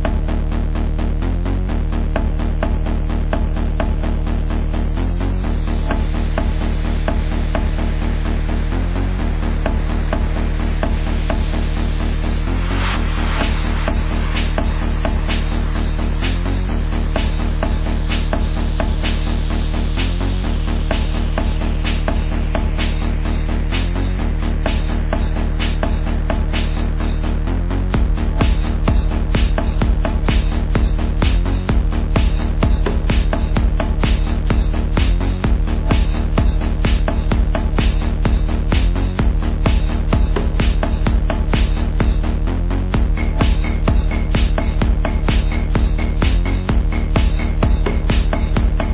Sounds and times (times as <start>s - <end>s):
Exciting music: 0.0s - 48.9s.